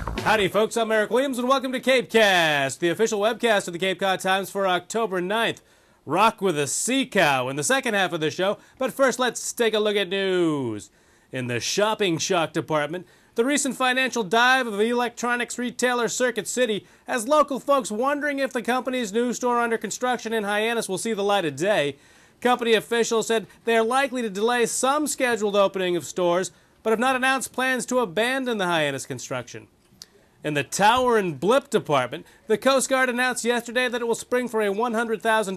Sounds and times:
Speech: 0:00.2 - 0:29.7, 0:30.4 - 0:35.5.

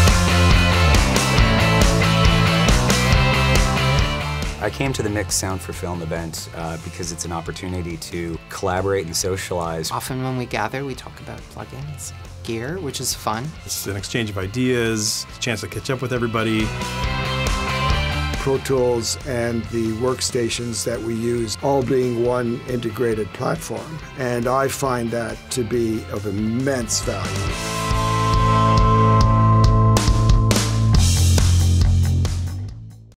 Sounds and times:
Music: 0:00.0 - 0:33.1
Speech: 0:04.6 - 0:16.7, 0:18.4 - 0:27.5.

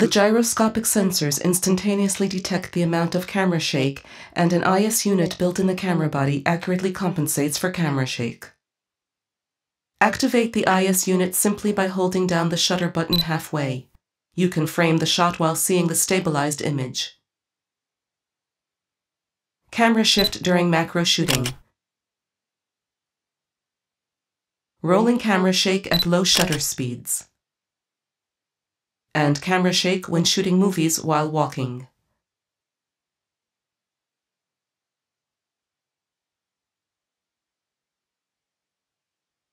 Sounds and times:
Speech: 0:00.0 - 0:08.5, 0:10.0 - 0:17.2, 0:19.8 - 0:21.6, 0:24.8 - 0:27.3, 0:29.2 - 0:31.9
Camera: 0:21.3 - 0:21.6, 0:26.0 - 0:26.7.

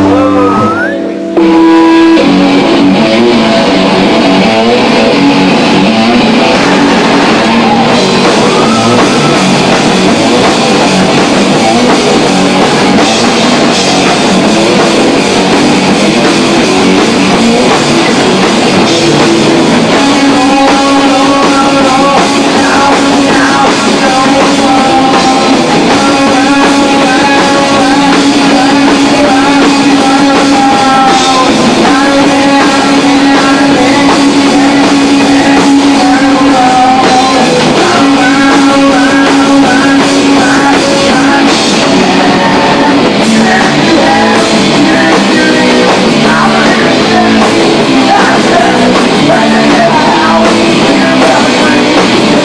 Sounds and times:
Music: 0:00.0 - 0:52.4.

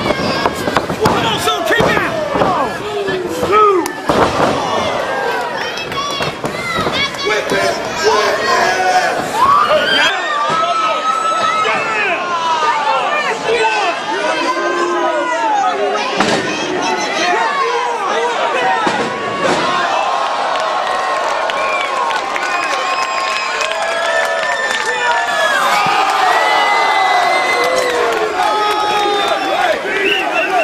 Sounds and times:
Inside, public space: 0:00.0 - 0:30.6.

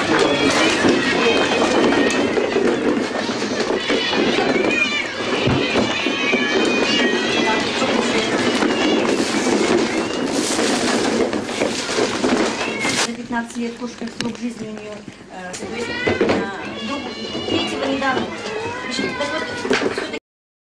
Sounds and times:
Caterwaul: 0:00.0 - 0:13.1, 0:15.8 - 0:20.2
Meow: 0:00.0 - 0:13.1, 0:15.7 - 0:20.2
Speech: 0:13.1 - 0:20.2.

